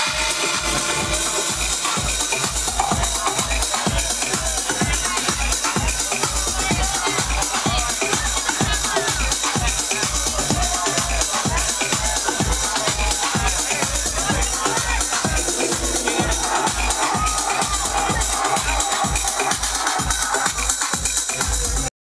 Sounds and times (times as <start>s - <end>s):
Music: 0.0s - 21.9s
Speech: 0.0s - 21.9s.